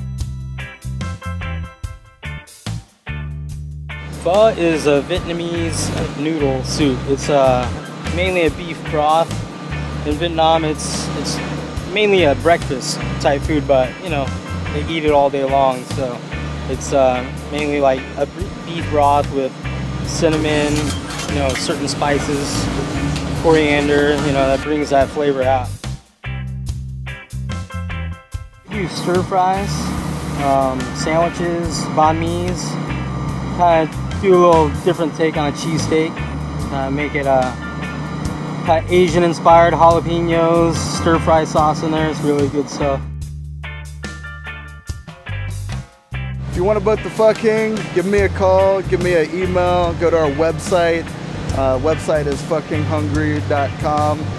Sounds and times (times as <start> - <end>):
Music: 0.0 - 54.3
Speech: 4.2 - 9.4, 10.0 - 25.8, 28.7 - 32.8, 33.6 - 37.6, 38.7 - 43.1, 46.5 - 54.3.